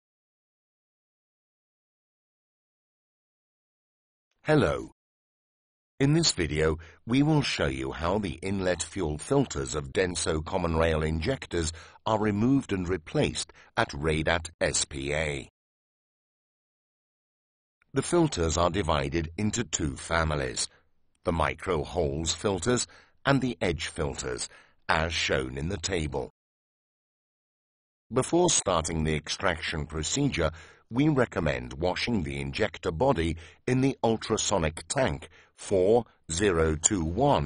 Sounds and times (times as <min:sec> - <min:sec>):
Speech: 0:04.5 - 0:05.0, 0:06.0 - 0:15.5, 0:17.9 - 0:26.4, 0:28.1 - 0:37.4.